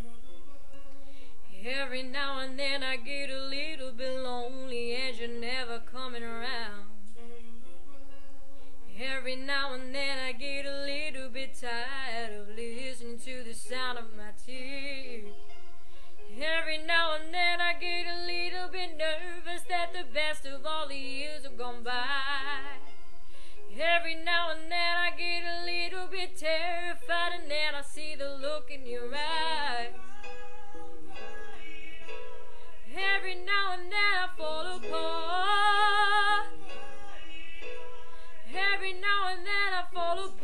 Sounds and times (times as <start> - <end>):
Music: 0.0 - 40.4
Female singing: 1.5 - 7.8, 8.9 - 15.4, 16.3 - 22.9, 23.7 - 32.1, 32.8 - 37.7, 38.3 - 40.4.